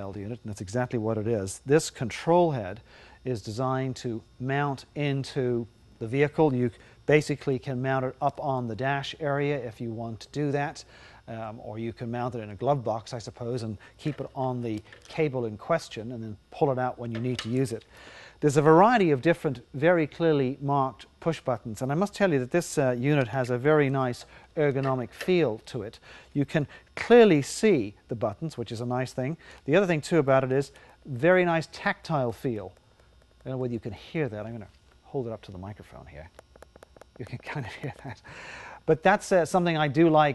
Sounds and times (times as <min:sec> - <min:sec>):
Speech: 0:00.0 - 0:17.8, 0:18.4 - 0:32.8, 0:33.4 - 0:36.4, 0:37.2 - 0:38.2, 0:38.9 - 0:40.3.